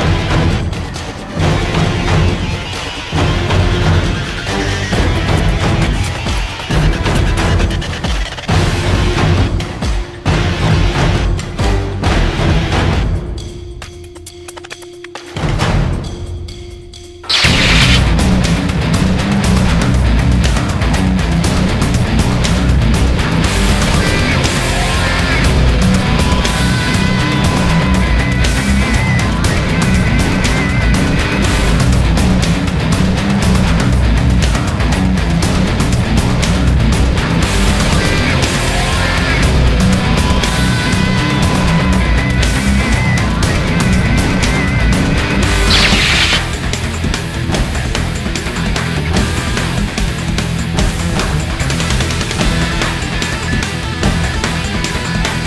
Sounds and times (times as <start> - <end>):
Music: 0.0 - 55.4.